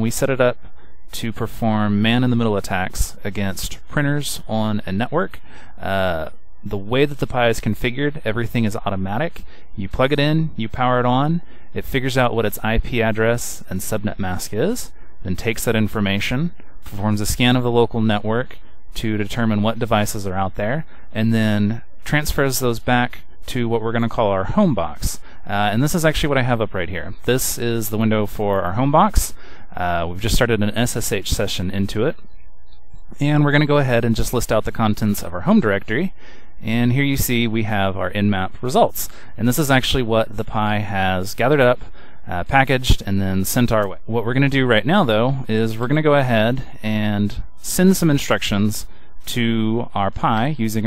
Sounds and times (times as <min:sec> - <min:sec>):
Speech: 0:00.0 - 0:32.3, 0:33.2 - 0:50.8.